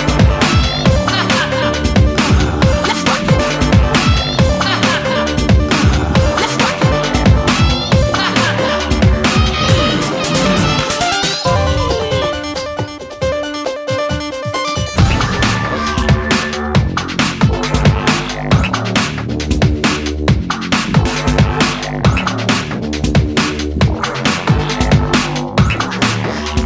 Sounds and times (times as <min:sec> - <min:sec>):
Drum and bass: 0:00.0 - 0:26.6.